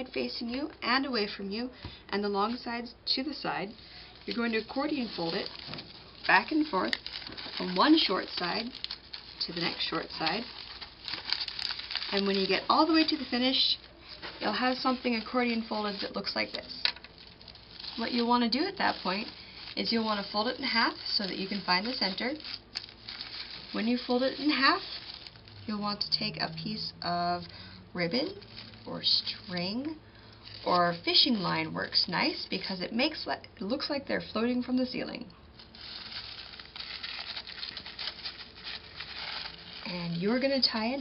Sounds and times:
Speech: 0.0s - 5.5s, 6.3s - 7.0s, 7.6s - 8.8s, 9.4s - 10.5s, 12.1s - 13.8s, 14.4s - 16.8s, 18.0s - 22.5s, 23.7s - 24.9s, 25.7s - 30.0s, 30.6s - 35.3s, 39.8s - 41.0s.

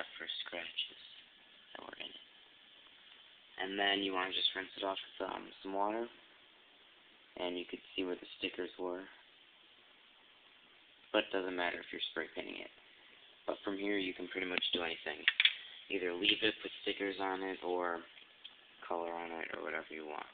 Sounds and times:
Speech: 0.0s - 2.3s, 3.6s - 6.2s, 7.4s - 9.2s, 11.1s - 12.8s, 13.5s - 15.3s, 15.9s - 18.1s, 18.8s - 20.3s.

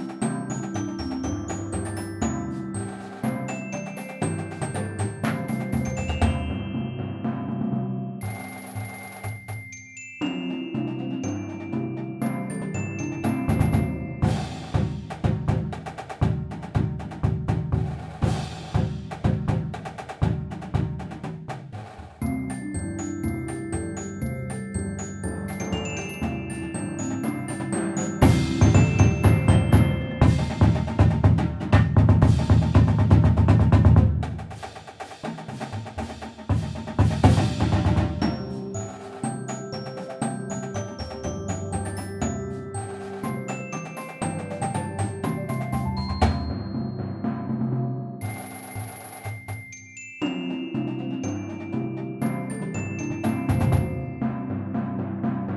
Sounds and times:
Timpani: 0.0s - 8.5s, 10.2s - 48.3s, 50.2s - 55.5s.

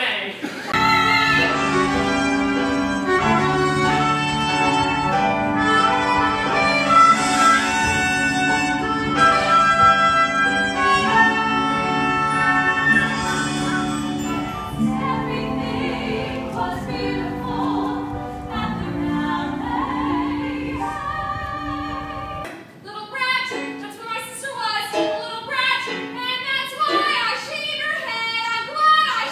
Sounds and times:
Orchestra: 0.7s - 22.6s
Violin, fiddle: 0.8s - 17.4s.

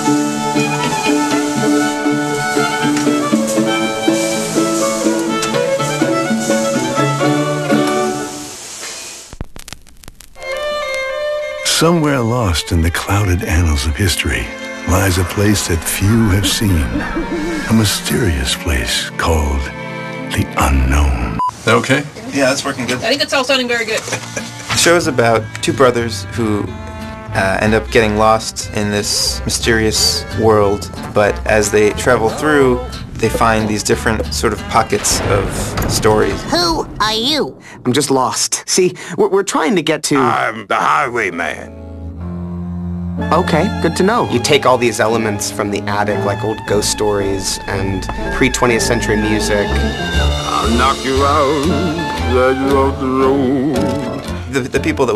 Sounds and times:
Music: 0.0s - 8.9s, 10.4s - 21.5s, 22.5s - 36.6s, 40.2s - 55.1s
Speech: 11.6s - 17.0s, 17.7s - 19.7s, 20.3s - 24.0s, 24.8s - 41.7s, 43.3s - 49.8s, 50.5s - 51.6s, 52.3s - 53.4s, 54.5s - 55.1s.

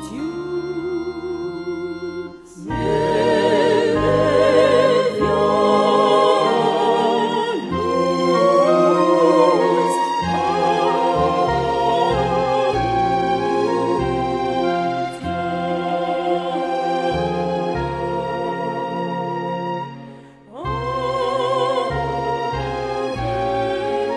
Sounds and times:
Christian music: 0.0s - 24.1s.

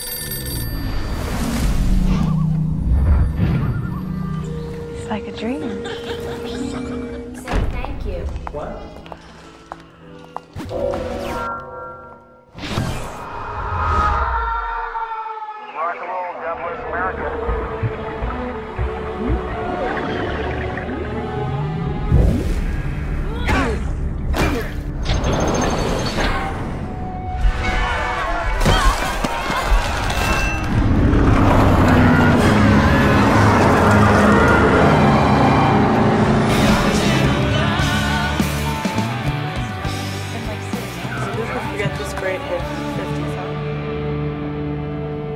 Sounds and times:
Music: 2.0s - 11.6s, 16.1s - 45.3s.

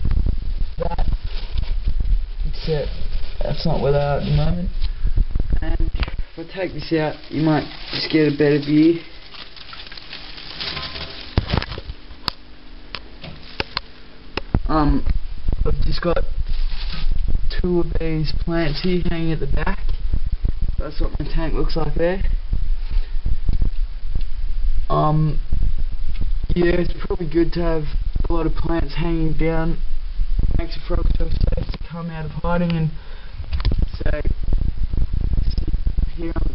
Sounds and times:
Speech: 2.5s - 4.7s, 5.6s - 9.1s, 14.7s - 16.3s, 17.5s - 19.8s, 20.8s - 22.4s, 24.9s - 25.4s, 26.5s - 29.8s, 30.6s - 33.0s, 33.9s - 34.4s, 35.6s - 36.5s.

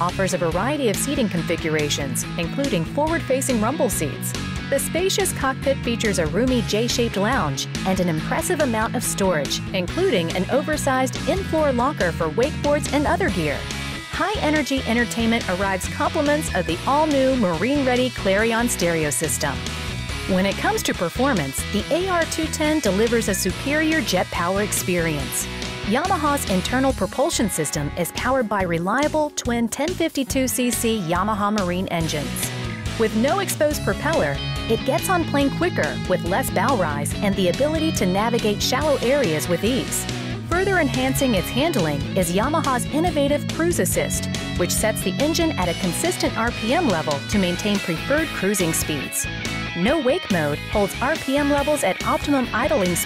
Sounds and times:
Speech: 0.0s - 19.6s, 20.3s - 53.0s
Music: 0.0s - 53.0s.

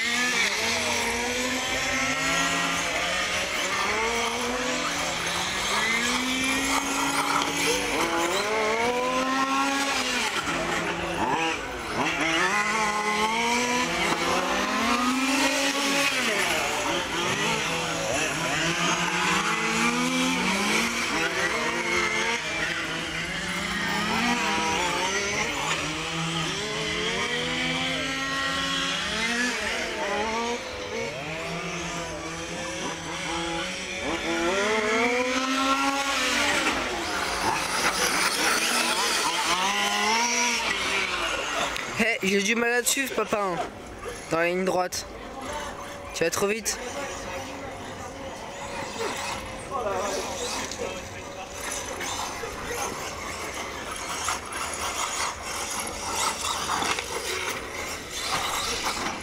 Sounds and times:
Car: 0.0s - 59.2s.

